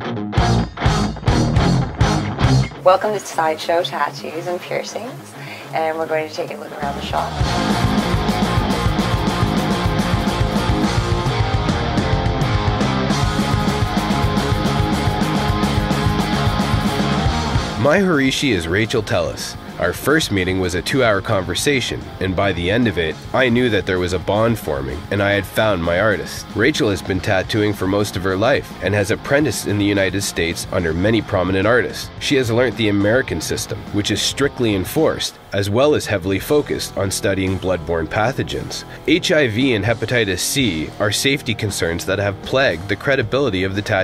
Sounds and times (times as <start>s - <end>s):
Music: 0.0s - 44.0s
Speech: 2.8s - 7.4s, 17.8s - 44.0s.